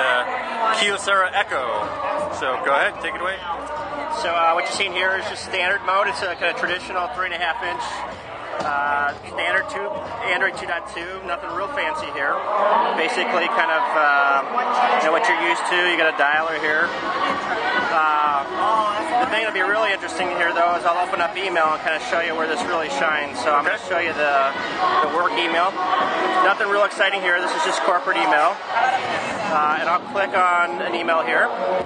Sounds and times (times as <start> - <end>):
Speech: 0.0 - 16.9, 17.7 - 25.8, 26.4 - 31.6.